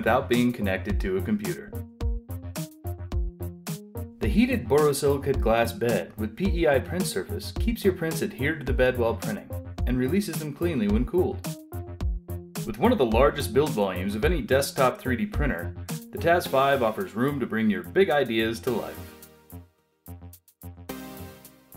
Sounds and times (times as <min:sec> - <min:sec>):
Speech: 0:00.0 - 0:01.8, 0:04.2 - 0:11.5, 0:12.6 - 0:19.0
Music: 0:00.0 - 0:21.7.